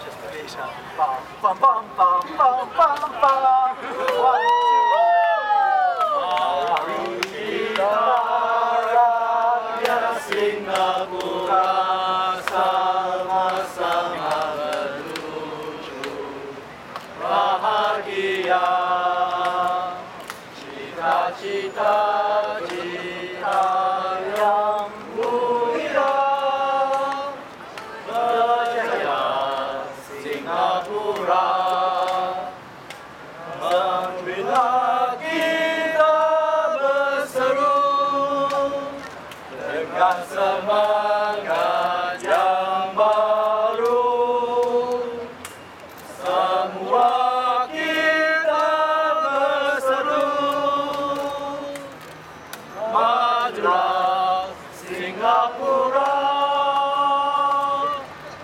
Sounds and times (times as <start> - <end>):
Male singing: 1.5 - 4.5, 6.2 - 16.6, 17.2 - 27.4, 33.6 - 45.4, 46.2 - 52.0, 52.8 - 58.1
Choir: 2.5 - 32.7, 33.4 - 45.5, 46.1 - 52.1, 52.7 - 58.2.